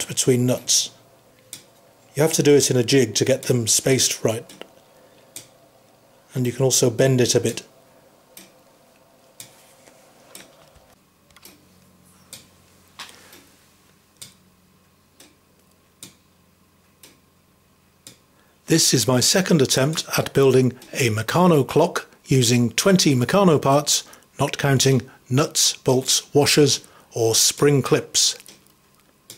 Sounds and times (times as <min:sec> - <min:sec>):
Speech: 0:00.0 - 0:01.0, 0:02.1 - 0:04.6, 0:06.3 - 0:07.7, 0:18.7 - 0:28.5.